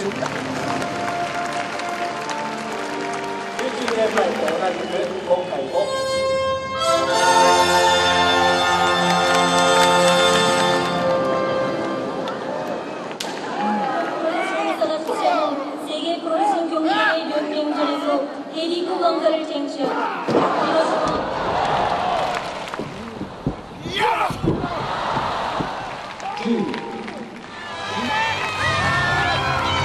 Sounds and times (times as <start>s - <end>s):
Music: 0.0s - 13.1s, 27.4s - 29.8s.